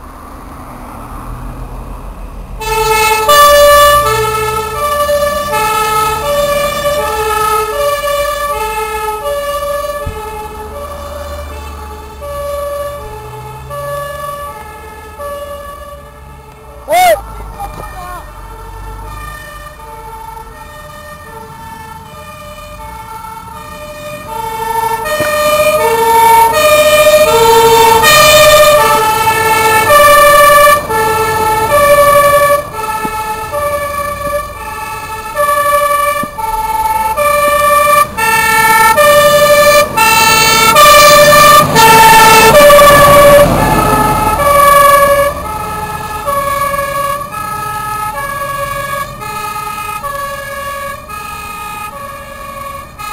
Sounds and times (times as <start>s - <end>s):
Fire engine, fire truck (siren): 0.0s - 53.1s.